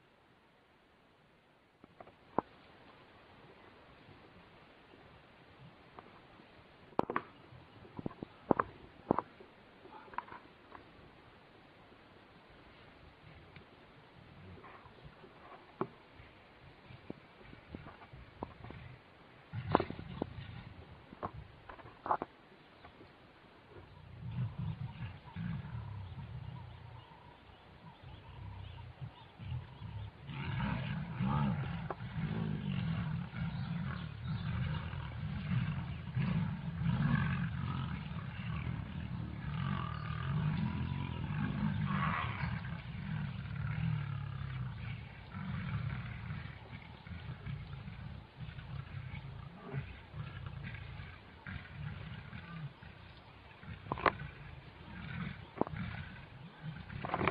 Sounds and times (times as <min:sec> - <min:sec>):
Roar: 0:14.3 - 0:15.9, 0:17.7 - 0:22.3, 0:23.8 - 0:57.3.